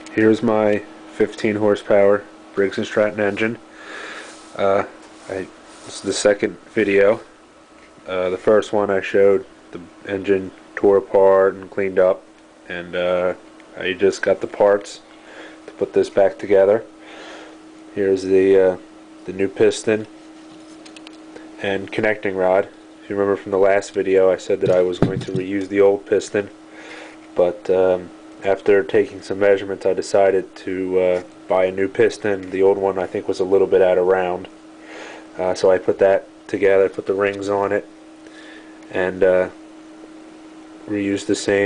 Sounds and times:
Speech: 0.1s - 3.6s, 4.6s - 7.3s, 8.0s - 15.1s, 15.7s - 16.9s, 17.9s - 20.1s, 21.6s - 26.6s, 27.4s - 34.5s, 35.4s - 37.9s, 38.9s - 39.6s, 40.9s - 41.6s.

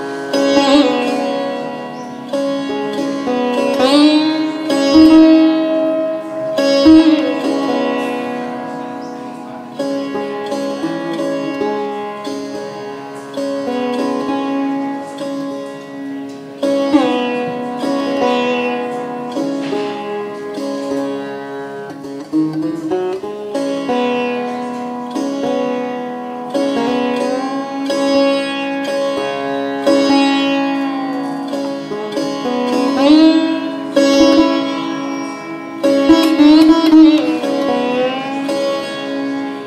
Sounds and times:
Bowed string instrument: 0.0s - 39.6s
Sitar: 0.0s - 39.6s.

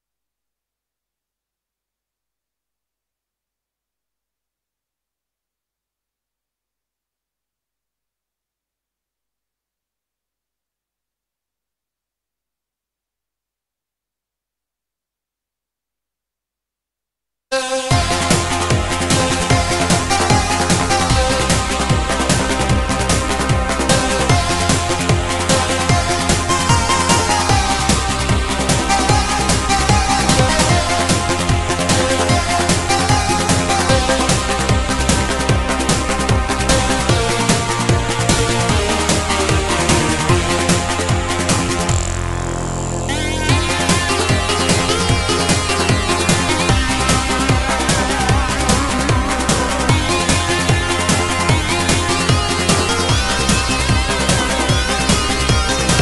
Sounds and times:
Music: 17.5s - 56.0s.

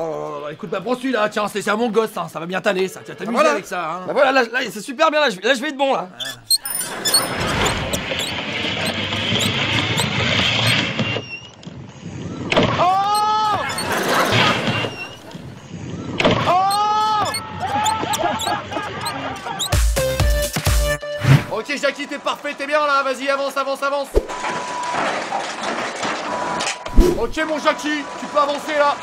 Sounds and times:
Speech: 0.0s - 6.4s, 21.5s - 24.2s, 27.2s - 29.0s.

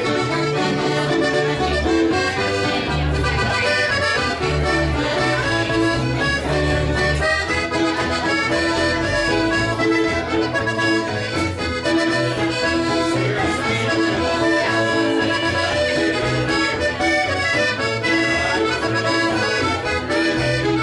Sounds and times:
Music: 0.0s - 20.8s.

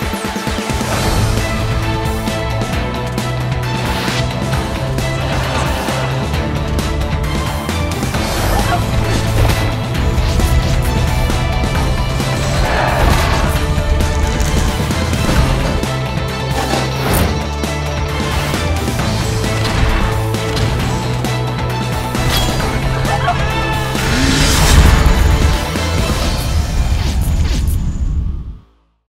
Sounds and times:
Music: 0.0s - 29.1s.

